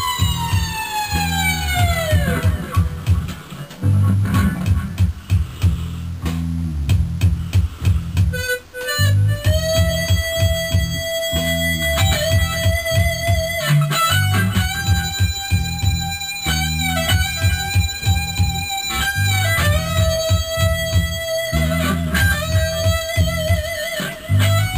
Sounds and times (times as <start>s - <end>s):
Bass guitar: 0.0s - 24.7s.